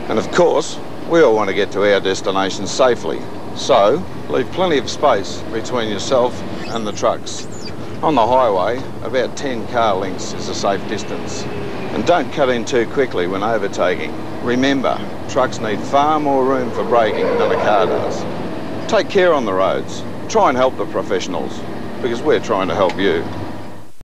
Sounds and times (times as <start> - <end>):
Car: 0.0 - 23.9
Truck: 0.0 - 24.0
Speech: 0.1 - 18.3, 18.9 - 23.3.